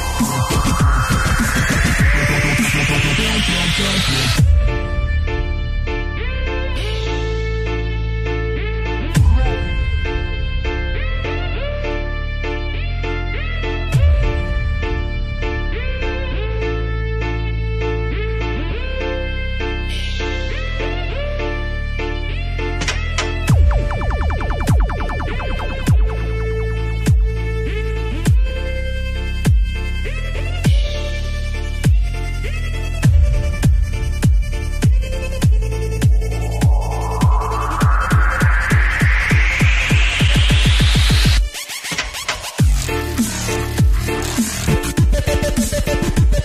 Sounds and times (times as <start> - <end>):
Dubstep: 0.0 - 5.5, 22.8 - 28.6, 30.6 - 46.4.